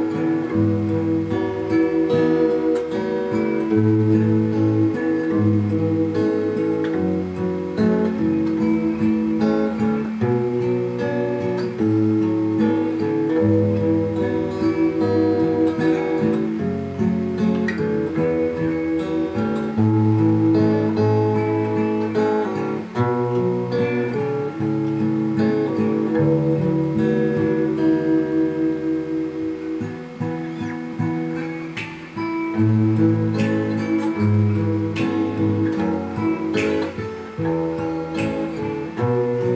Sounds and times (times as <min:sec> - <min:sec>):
Acoustic guitar: 0:00.0 - 0:39.5
Strum: 0:00.0 - 0:39.5.